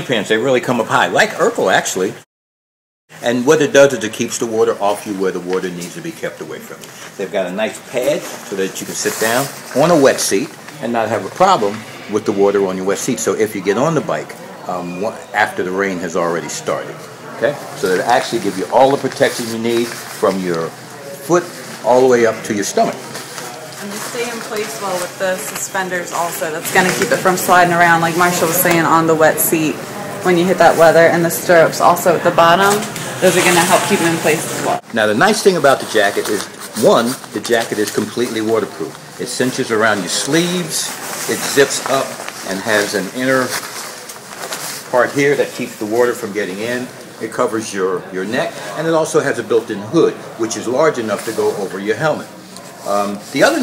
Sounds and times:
Speech: 3.2 - 23.2, 23.8 - 43.6, 44.9 - 53.6.

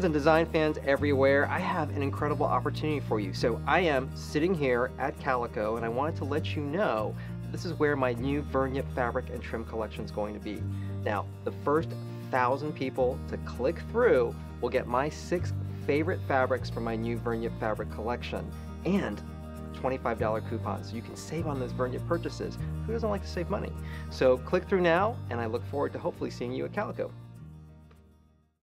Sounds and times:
Speech: 0.0 - 19.2, 19.8 - 27.1
Music: 0.0 - 28.6.

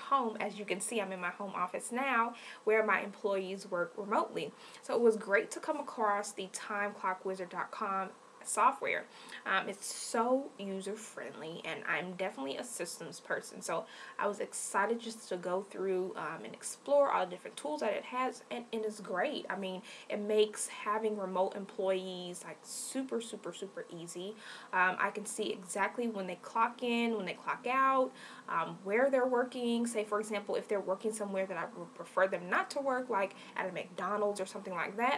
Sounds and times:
Speech: 0.0 - 35.1.

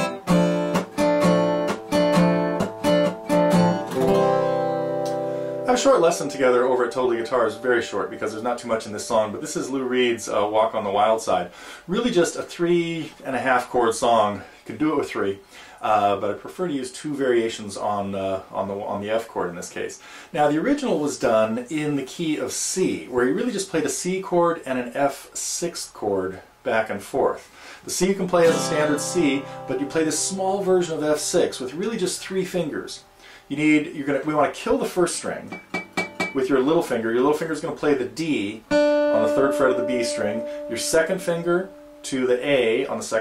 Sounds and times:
Speech: 5.7 - 35.6, 36.3 - 43.2.

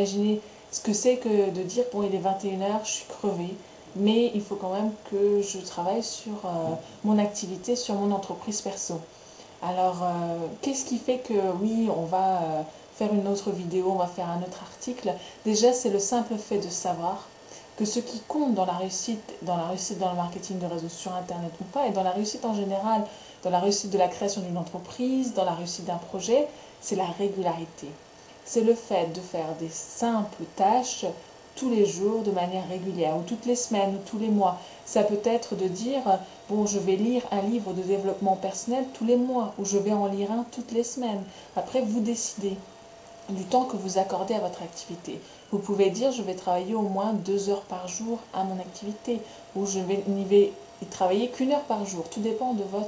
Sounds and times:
Speech: 0.0 - 42.7, 43.3 - 52.8.

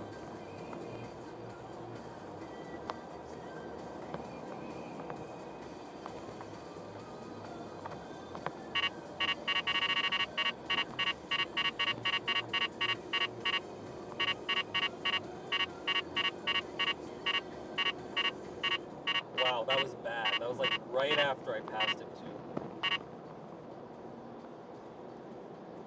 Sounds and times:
Car: 0.0 - 25.8
Speech: 19.4 - 22.4.

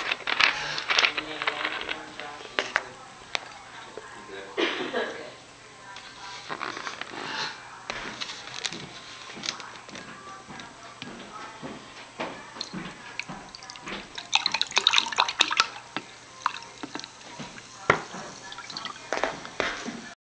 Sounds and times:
Speech: 0.6 - 14.8, 15.4 - 20.2.

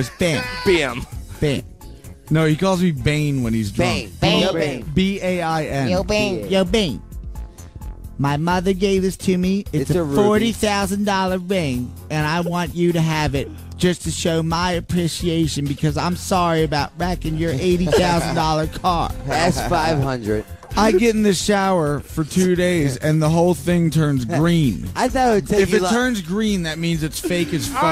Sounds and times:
Speech: 0.0 - 1.6, 2.3 - 7.0, 8.2 - 27.9
Music: 0.0 - 27.9
Radio: 10.0 - 10.5.

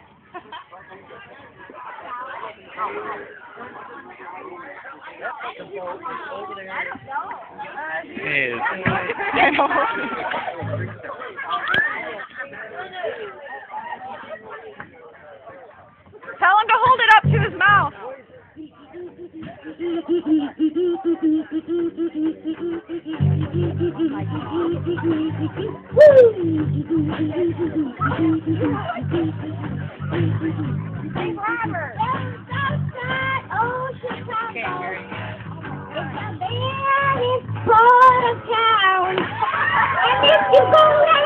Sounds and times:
Speech: 0.4 - 22.4.

